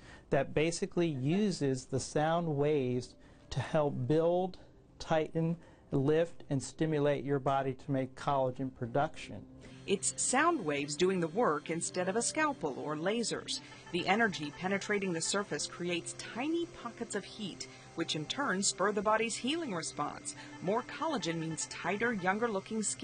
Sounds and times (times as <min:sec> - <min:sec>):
Music: 0:00.0 - 0:23.0
Speech: 0:00.3 - 0:23.0.